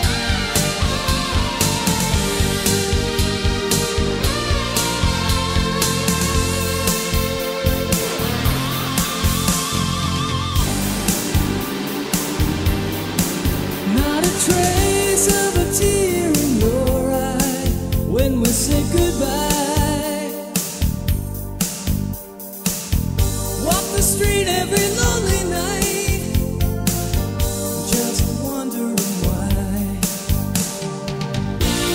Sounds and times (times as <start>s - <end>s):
Music: 0.0s - 31.9s.